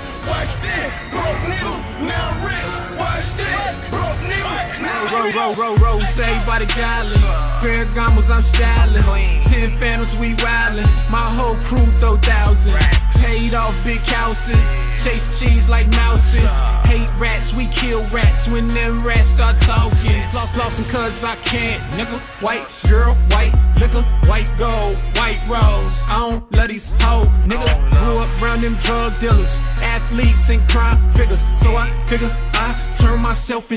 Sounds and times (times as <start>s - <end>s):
Song: 0.0s - 33.7s.